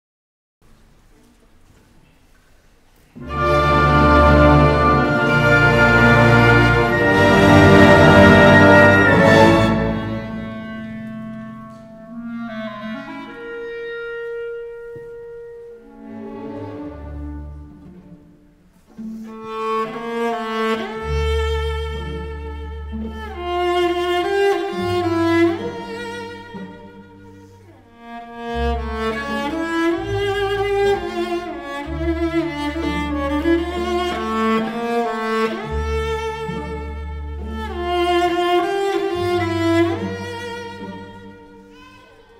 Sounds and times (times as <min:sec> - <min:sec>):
Orchestra: 0:00.7 - 0:42.3
Cello: 0:01.1 - 0:42.3
Violin, fiddle: 0:18.9 - 0:42.3.